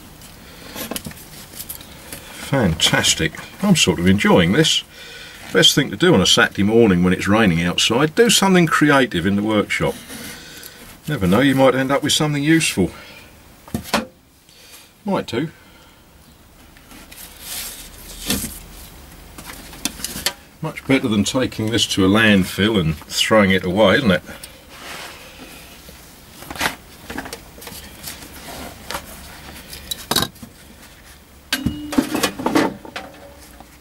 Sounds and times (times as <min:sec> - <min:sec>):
Speech: 0:02.5 - 0:04.9, 0:05.5 - 0:10.0, 0:11.1 - 0:13.0, 0:15.0 - 0:15.6, 0:20.6 - 0:24.4.